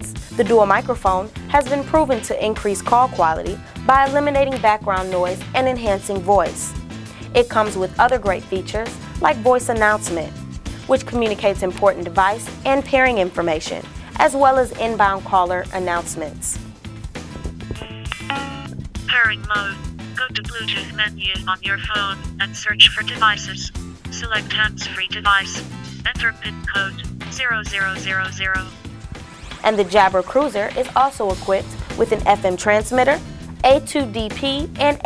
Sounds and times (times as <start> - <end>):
Music: 0.0 - 35.0
Speech: 0.4 - 6.7, 7.4 - 10.3, 10.9 - 16.6, 19.1 - 28.7, 29.7 - 35.0.